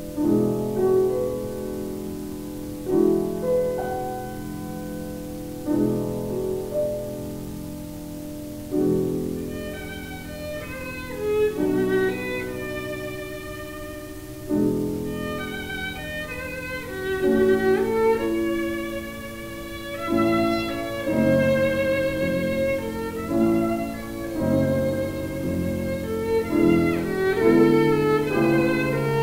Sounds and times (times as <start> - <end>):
Violin, fiddle: 9.2 - 29.2.